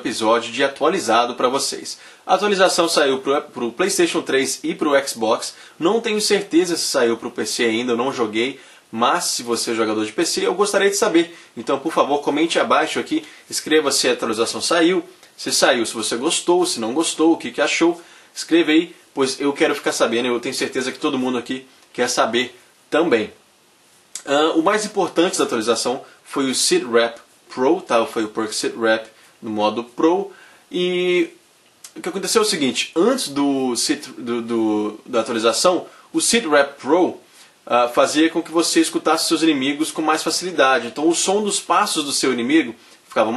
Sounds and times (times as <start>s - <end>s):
Speech: 0.0s - 23.4s, 24.2s - 43.3s.